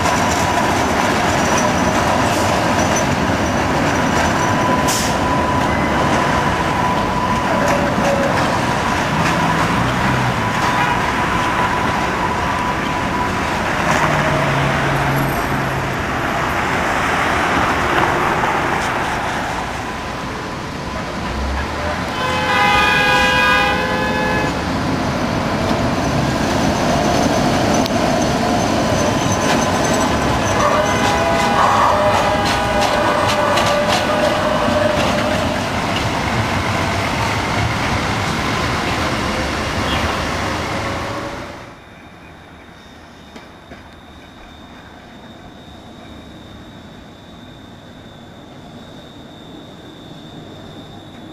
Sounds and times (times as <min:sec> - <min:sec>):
Traffic noise, roadway noise: 0:00.0 - 0:51.3
Train: 0:00.0 - 0:51.3.